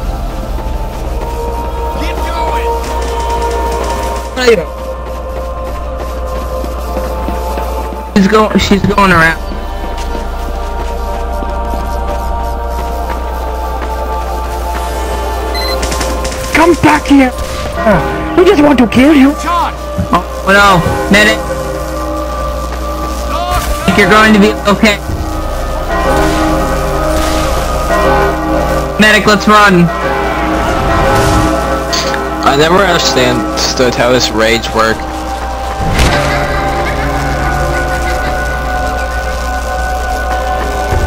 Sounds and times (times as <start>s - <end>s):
Music: 0.0s - 41.0s.